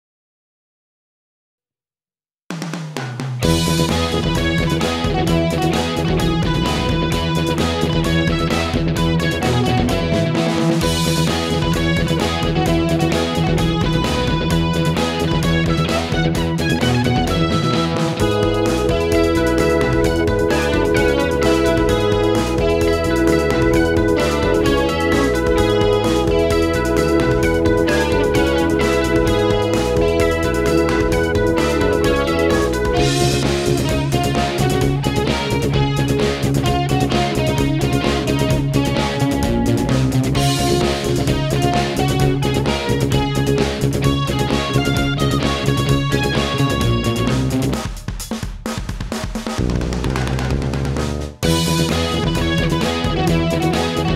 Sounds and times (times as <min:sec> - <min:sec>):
Rhythm and blues: 0:03.4 - 0:54.1.